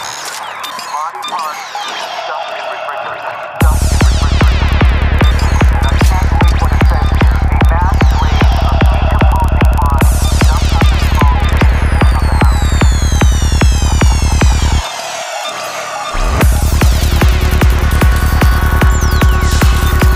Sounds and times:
Music: 0.0s - 20.1s.

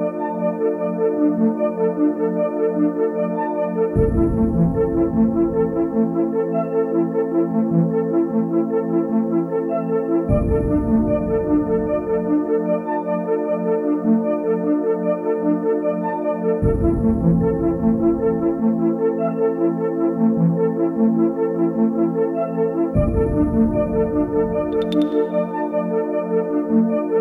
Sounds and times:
Sampler: 24.6s - 25.5s.

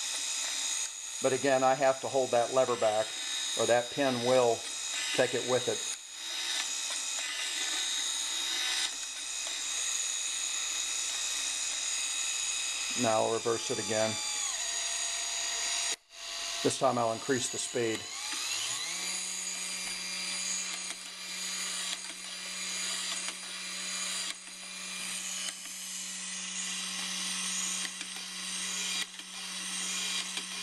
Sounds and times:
Ratchet, pawl: 0.0s - 30.6s.

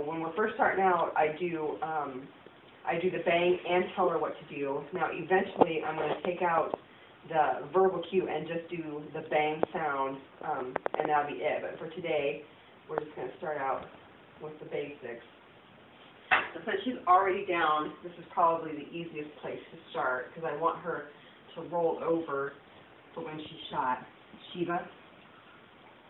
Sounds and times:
Speech: 0.0s - 15.3s, 16.4s - 22.6s, 23.2s - 25.0s.

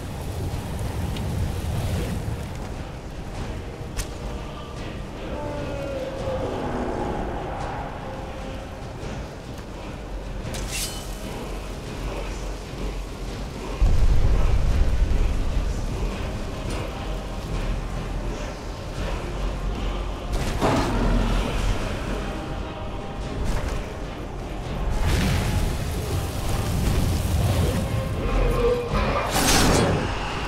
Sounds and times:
Music: 0.0s - 30.4s.

